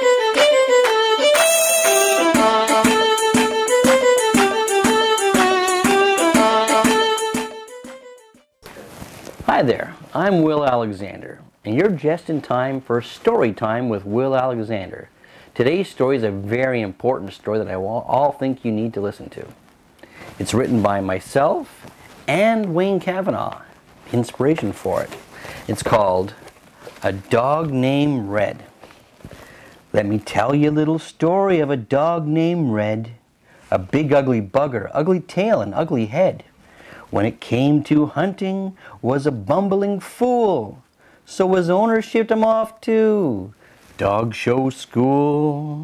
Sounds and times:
Speech: 0:09.5 - 0:19.6, 0:20.4 - 0:26.4, 0:27.0 - 0:28.7, 0:29.9 - 0:36.5, 0:37.1 - 0:45.2.

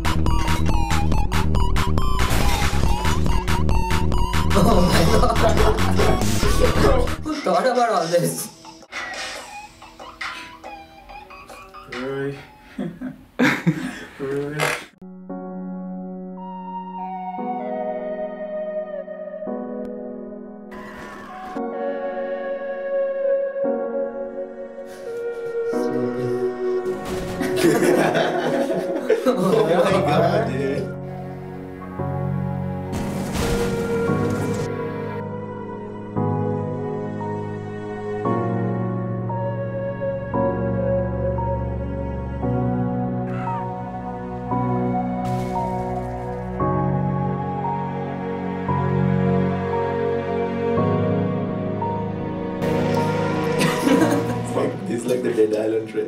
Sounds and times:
Sad music: 0:00.0 - 0:07.7, 0:14.9 - 0:56.0.

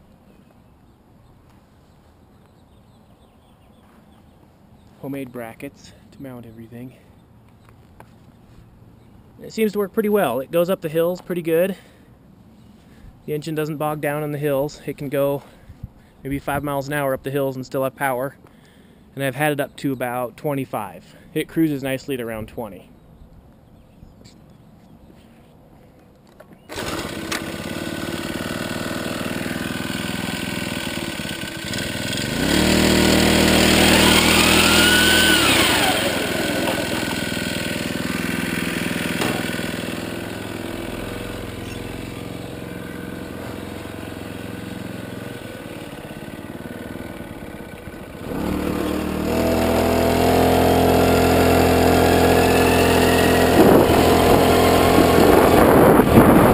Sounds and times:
Speech: 0:05.0 - 0:07.0, 0:09.4 - 0:11.8, 0:13.3 - 0:15.5, 0:16.2 - 0:18.4, 0:19.2 - 0:22.9.

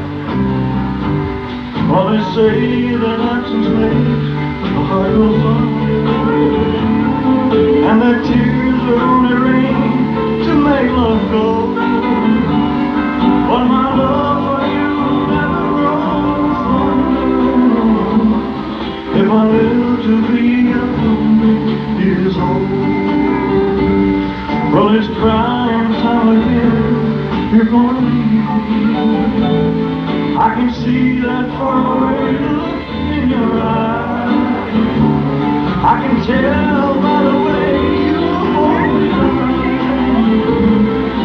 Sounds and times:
Music: 0:00.0 - 0:41.2.

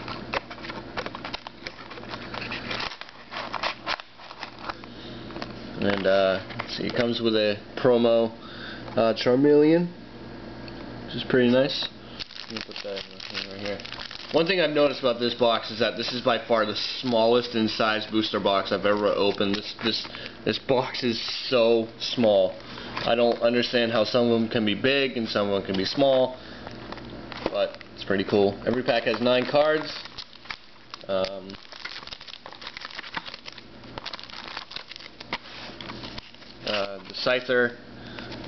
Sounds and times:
Inside, small room: 0:00.0 - 0:38.4
Speech: 0:05.8 - 0:08.4, 0:09.0 - 0:10.0, 0:11.1 - 0:13.8, 0:14.4 - 0:26.4, 0:27.5 - 0:29.9, 0:31.1 - 0:31.6, 0:36.6 - 0:37.8.

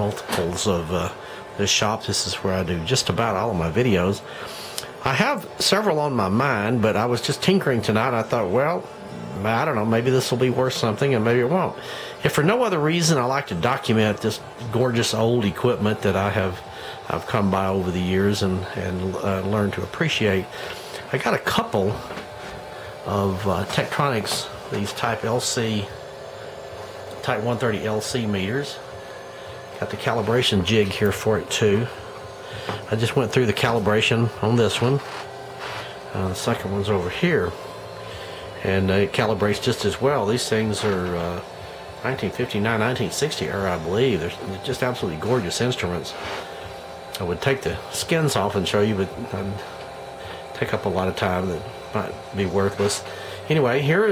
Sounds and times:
Speech: 0:00.0 - 0:22.2, 0:23.0 - 0:26.0, 0:27.2 - 0:28.9, 0:29.8 - 0:32.0, 0:32.8 - 0:35.2, 0:36.1 - 0:37.6, 0:38.6 - 0:46.4, 0:47.2 - 0:49.8, 0:50.5 - 0:54.1.

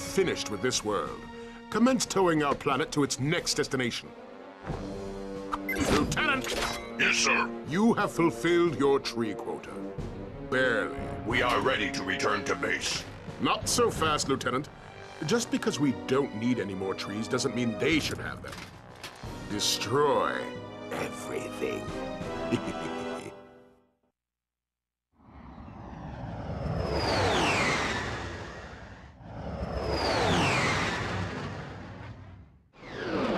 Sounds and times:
Music: 0:00.0 - 0:24.1
Speech: 0:05.8 - 0:09.9, 0:10.5 - 0:18.5, 0:19.5 - 0:21.9.

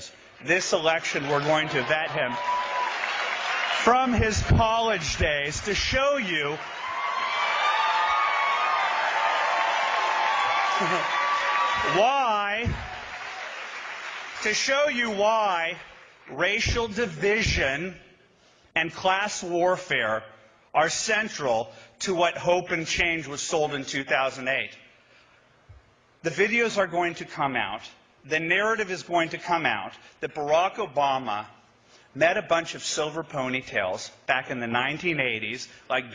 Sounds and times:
Male speech, man speaking: 0:00.0 - 0:02.4, 0:03.8 - 0:06.6, 0:11.8 - 0:12.8, 0:14.4 - 0:18.0, 0:18.8 - 0:24.8, 0:26.2 - 0:31.6, 0:32.2 - 0:36.1
Narration, monologue: 0:00.0 - 0:02.5, 0:03.4 - 0:06.7, 0:11.8 - 0:13.2, 0:14.1 - 0:36.1.

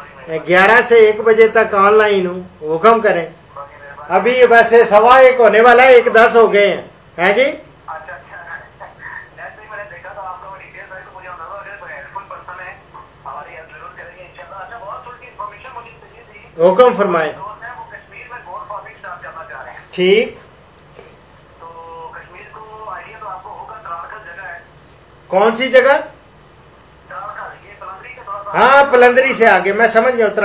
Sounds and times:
Speech: 0:00.0 - 0:20.4, 0:21.6 - 0:24.7, 0:25.3 - 0:26.2, 0:27.1 - 0:30.4.

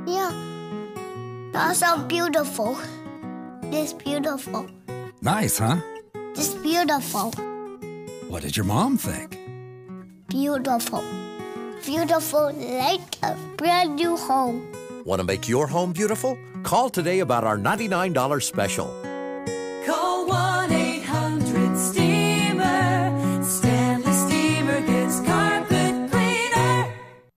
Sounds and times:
Happy music: 0:00.0 - 0:07.5, 0:08.2 - 0:09.4, 0:10.3 - 0:27.3
Speech: 0:05.2 - 0:05.8, 0:08.3 - 0:09.4, 0:15.1 - 0:18.9.

